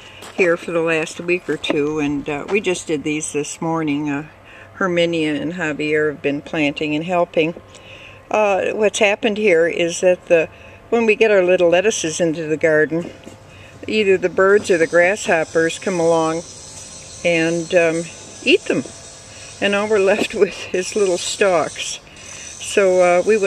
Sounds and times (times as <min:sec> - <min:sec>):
Speech: 0:00.4 - 0:07.6, 0:08.3 - 0:13.2, 0:13.8 - 0:16.4, 0:19.6 - 0:22.0, 0:22.6 - 0:23.4.